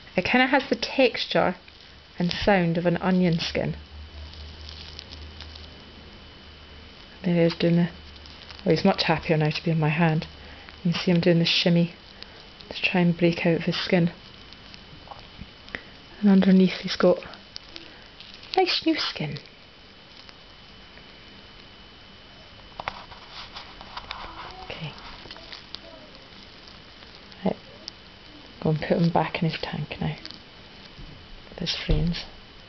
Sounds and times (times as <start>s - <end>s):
Inside, small room: 0.0s - 32.6s
Speech: 0.2s - 1.6s, 2.2s - 3.8s, 7.2s - 8.0s, 8.7s - 10.3s, 10.9s - 12.0s, 12.7s - 14.2s, 16.2s - 17.4s, 18.6s - 19.4s, 28.6s - 30.3s, 31.6s - 32.3s.